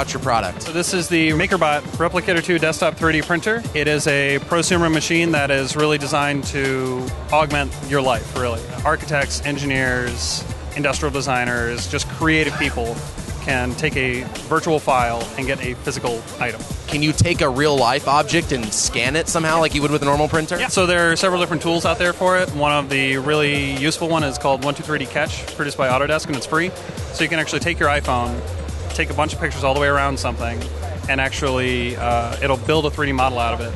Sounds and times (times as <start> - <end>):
Music: 0.0 - 33.7
Speech: 0.0 - 33.7.